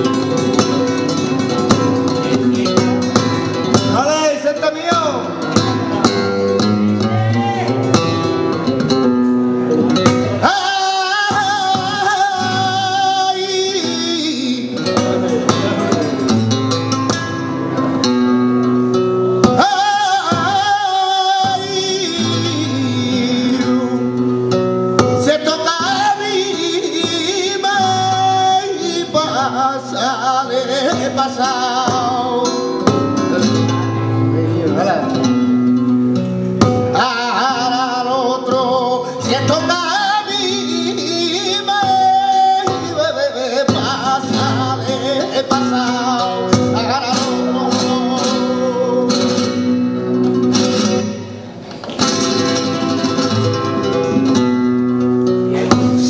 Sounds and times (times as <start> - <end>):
Flamenco: 0.0 - 56.1
Guitar: 0.0 - 56.1.